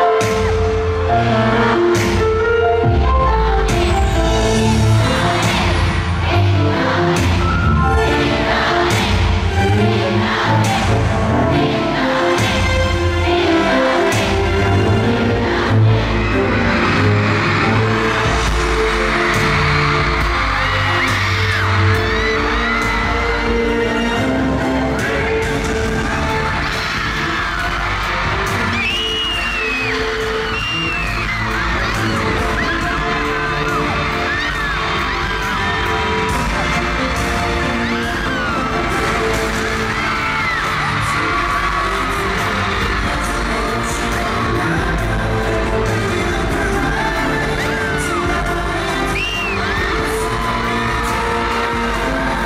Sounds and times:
Music: 0.0s - 52.4s.

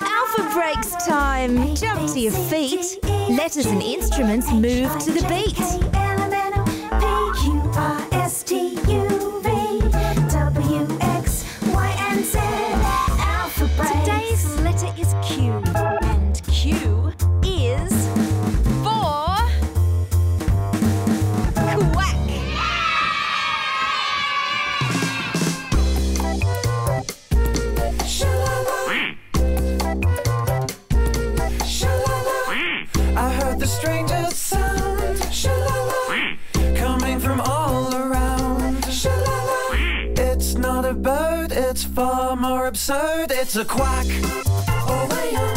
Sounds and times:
Music: 0.0s - 45.5s.

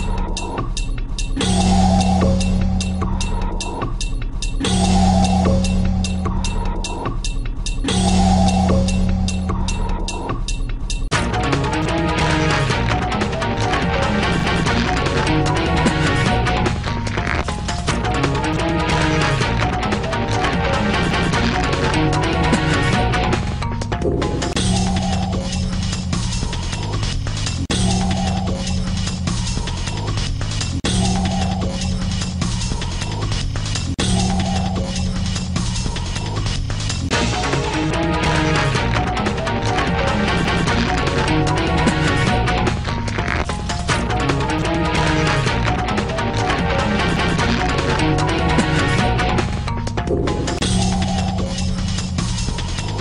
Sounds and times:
Sound effect: 0.0s - 23.4s, 24.0s - 53.0s.

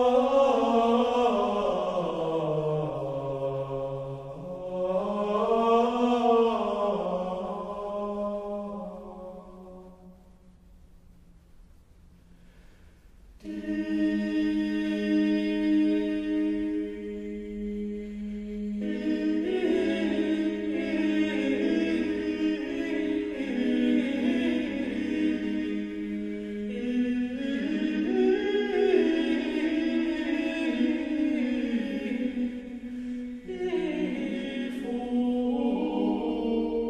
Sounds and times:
Mantra: 0.0s - 10.2s, 13.4s - 36.9s.

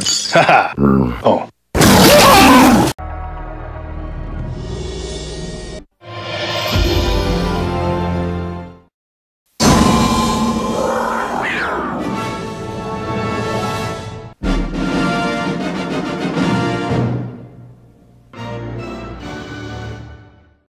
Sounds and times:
Music: 3.0s - 8.9s, 11.8s - 20.7s.

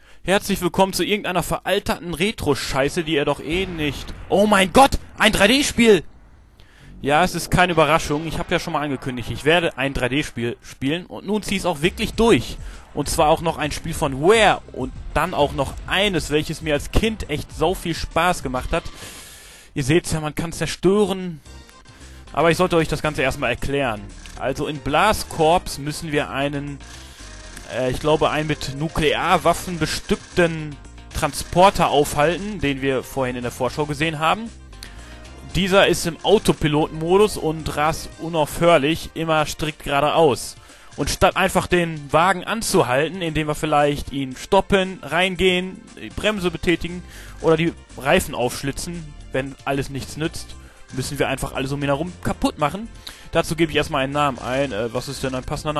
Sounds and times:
Music: 0.0s - 55.7s
Speech: 0.2s - 6.1s, 7.0s - 19.0s, 19.8s - 21.4s, 22.4s - 26.8s, 27.6s - 34.6s, 35.4s - 55.7s.

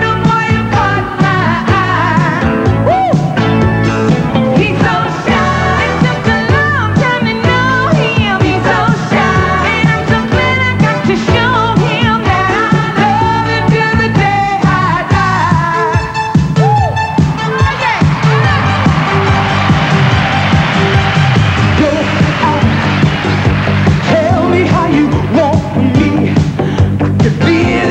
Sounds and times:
Singing: 0.0s - 3.2s, 4.6s - 16.1s, 21.6s - 23.0s, 24.0s - 26.5s, 27.2s - 27.9s
Pop music: 0.0s - 27.9s.

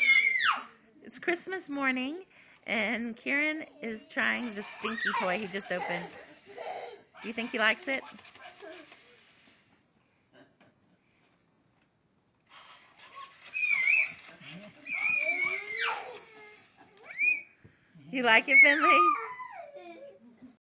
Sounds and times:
Speech: 18.1s - 19.2s.

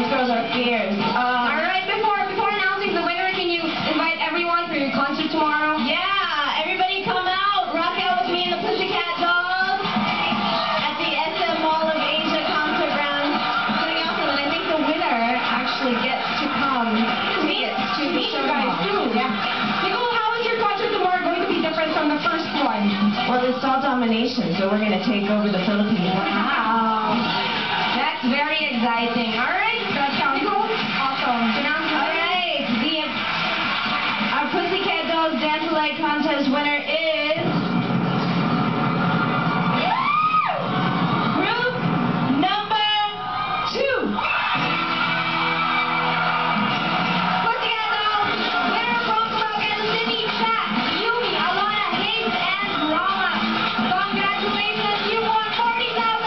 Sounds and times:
Speech: 0.0s - 9.8s
Music: 0.0s - 56.2s.

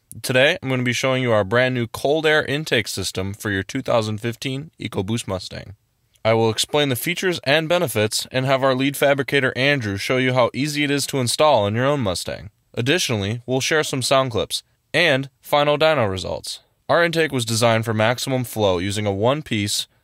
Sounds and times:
Speech: 0.1s - 19.9s.

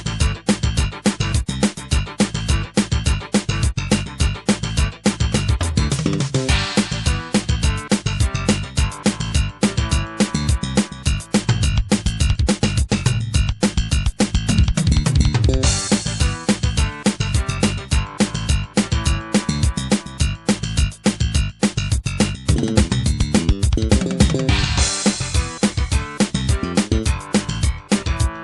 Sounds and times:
Video game music: 0.1s - 11.9s, 13.7s - 21.2s, 22.5s - 28.4s.

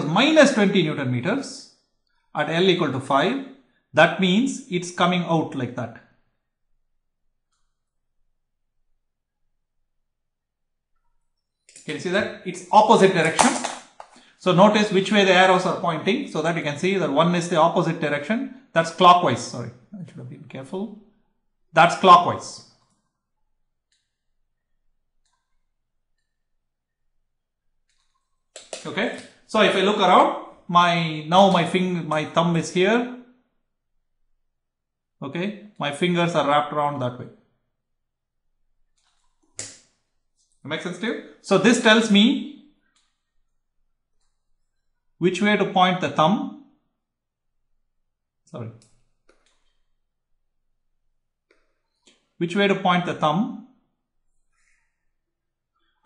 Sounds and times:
Speech: 0.0s - 1.7s, 2.4s - 6.1s, 11.8s - 13.6s, 14.4s - 21.0s, 21.7s - 22.7s, 28.8s - 33.2s, 35.2s - 37.4s, 40.6s - 42.5s, 45.2s - 46.5s, 48.5s - 48.8s, 52.4s - 53.6s
Inside, small room: 0.0s - 56.0s.

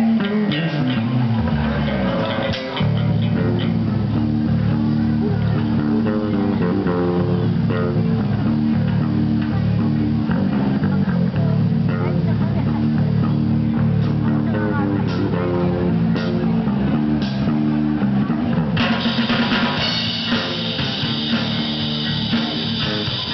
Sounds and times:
Music: 0.0s - 23.3s.

